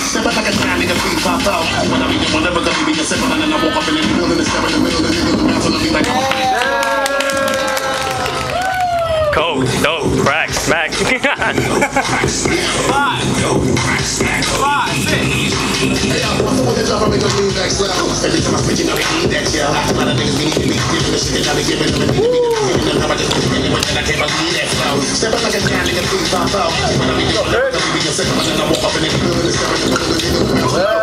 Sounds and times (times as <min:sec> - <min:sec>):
Music: 0:00.0 - 0:31.0.